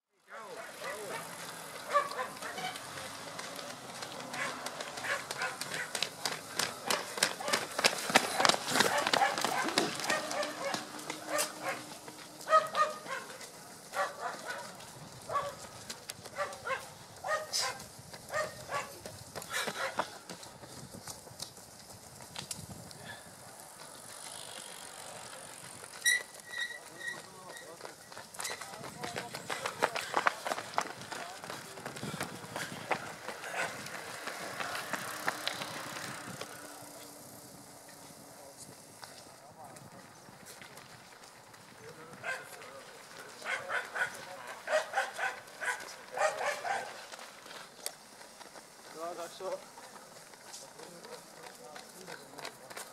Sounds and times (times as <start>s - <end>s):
Outside, rural or natural: 0.0s - 52.9s
Run: 0.1s - 52.9s.